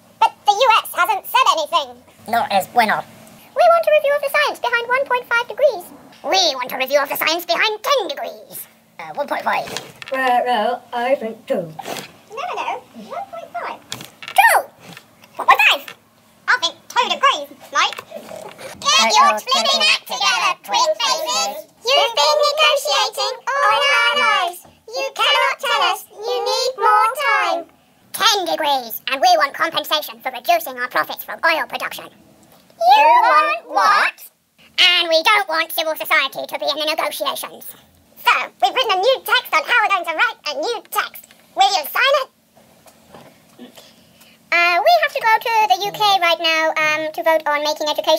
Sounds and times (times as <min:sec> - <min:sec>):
Child speech, kid speaking: 0:00.2 - 0:02.9, 0:03.6 - 0:10.6, 0:12.3 - 0:14.7, 0:15.4 - 0:18.2, 0:18.8 - 0:32.2, 0:32.8 - 0:42.4, 0:44.5 - 0:48.1.